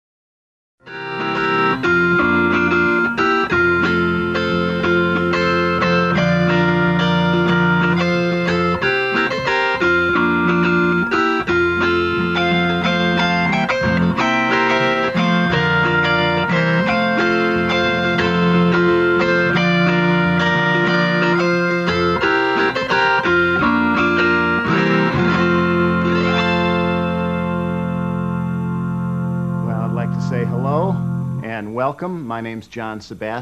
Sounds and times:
Steel guitar, slide guitar: 0:00.8 - 0:31.6
Tapping (guitar technique): 0:00.8 - 0:32.8.

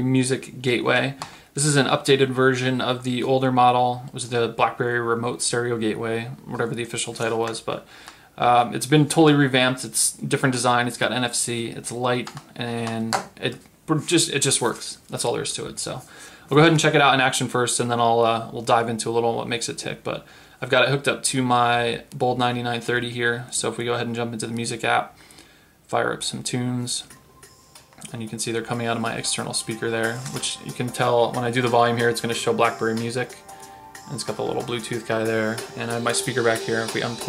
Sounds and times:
Speech: 0:00.0 - 0:25.2, 0:25.9 - 0:27.1, 0:28.0 - 0:33.4, 0:34.1 - 0:37.2.

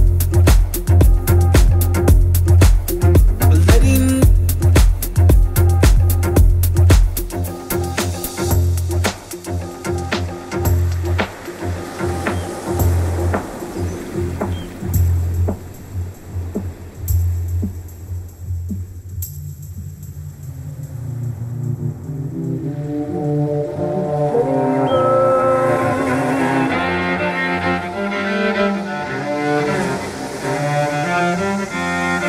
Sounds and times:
Music: 0:00.0 - 0:32.2.

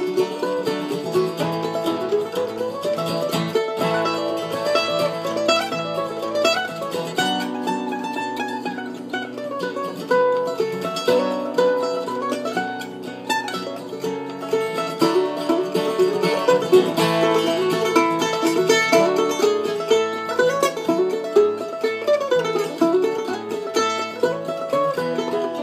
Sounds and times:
Country: 0:00.0 - 0:25.6
Guitar: 0:00.0 - 0:25.6
Mandolin: 0:00.0 - 0:25.6.

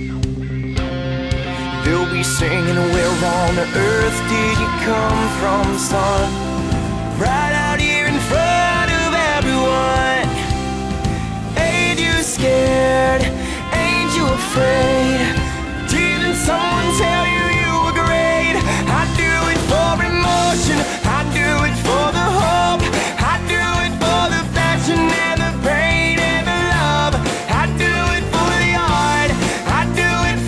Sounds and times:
Music: 0:00.0 - 0:30.4.

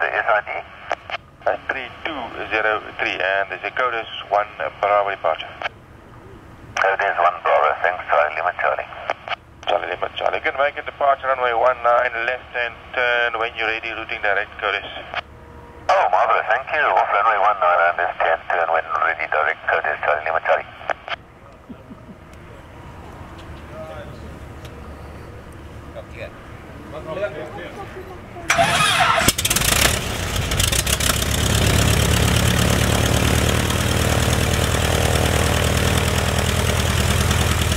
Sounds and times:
Speech: 0:00.0 - 0:00.7, 0:01.5 - 0:05.7, 0:06.8 - 0:15.2, 0:15.9 - 0:20.9.

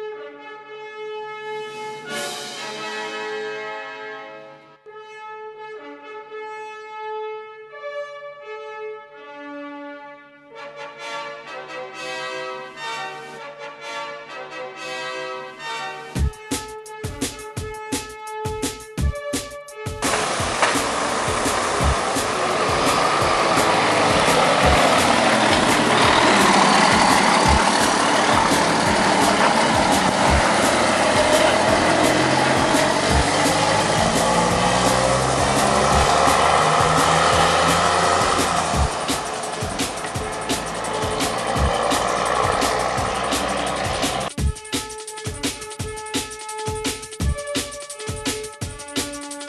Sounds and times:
Truck: 0:20.0 - 0:44.3.

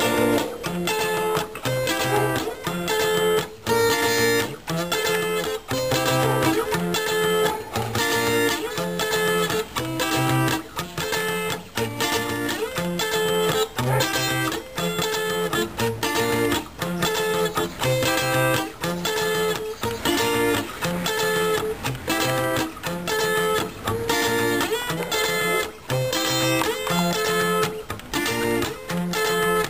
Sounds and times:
Electric guitar: 0:00.0 - 0:29.6.

